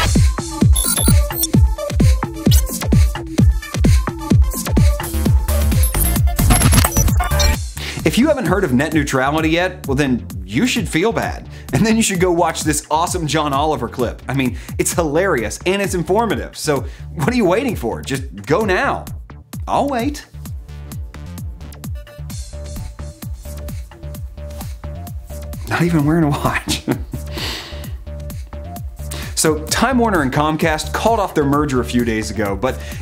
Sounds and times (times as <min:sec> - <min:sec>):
Music: 0:00.0 - 0:33.0
Speech: 0:08.0 - 0:20.3, 0:25.6 - 0:26.9, 0:29.4 - 0:32.8.